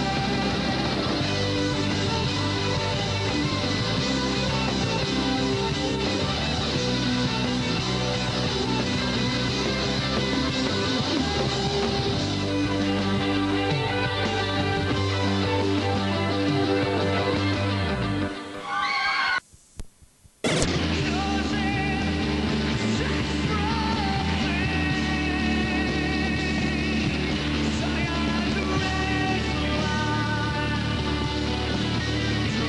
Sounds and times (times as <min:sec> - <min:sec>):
Music: 0:00.0 - 0:18.9, 0:20.5 - 0:32.6.